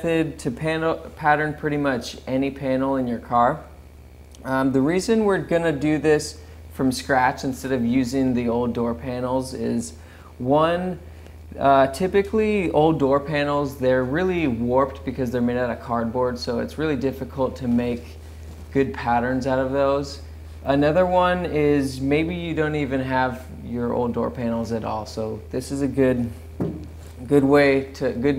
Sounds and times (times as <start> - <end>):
Speech: 0.0 - 3.8, 4.4 - 11.0, 11.6 - 26.4, 27.2 - 28.3.